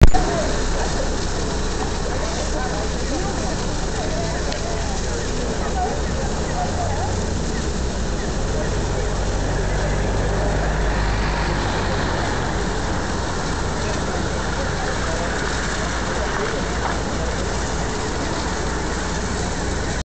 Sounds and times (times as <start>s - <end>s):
Speech: 0.0s - 20.0s
Waterfall: 0.0s - 20.0s.